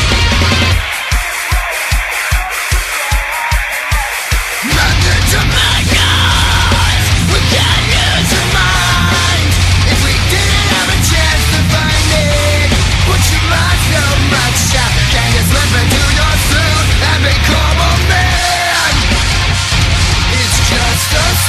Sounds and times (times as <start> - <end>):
Music: 0.0 - 21.4.